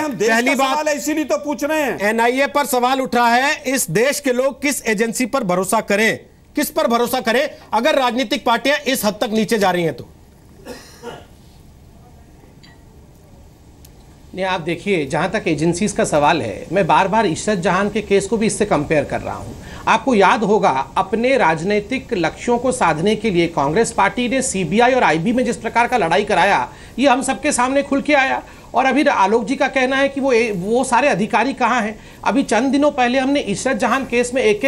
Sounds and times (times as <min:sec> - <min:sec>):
Speech: 0:00.0 - 0:10.1, 0:14.3 - 0:34.6.